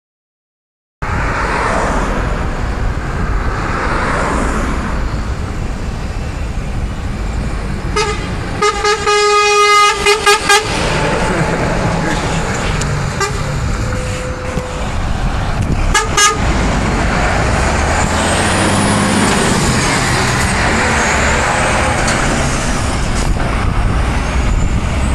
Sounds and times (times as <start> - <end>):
Air horn, truck horn: 8.0 - 10.8, 13.1 - 14.8, 15.9 - 16.4.